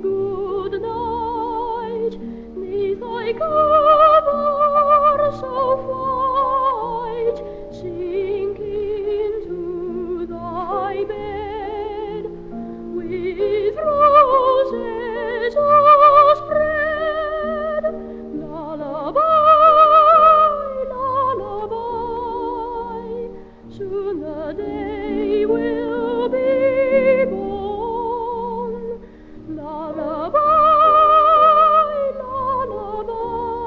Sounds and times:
Lullaby: 0:00.0 - 0:33.6.

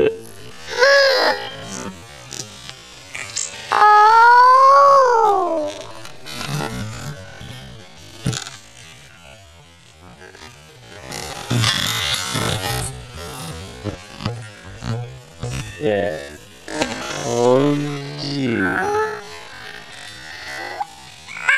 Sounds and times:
Speech: 0:15.8 - 0:19.3.

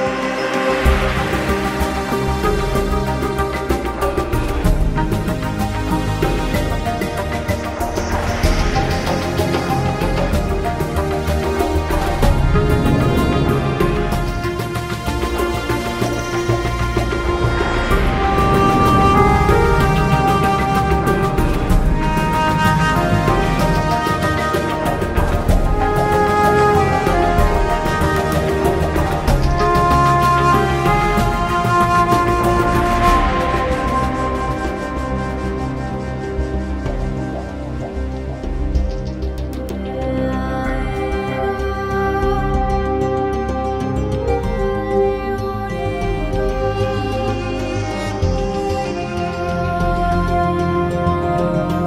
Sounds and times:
Music: 0:00.0 - 0:51.8.

